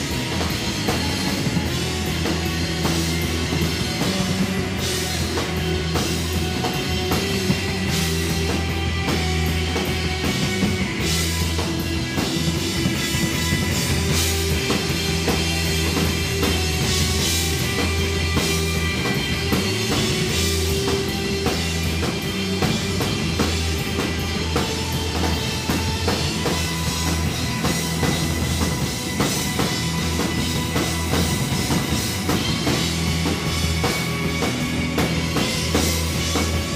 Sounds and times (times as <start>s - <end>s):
Music: 0.0s - 36.7s.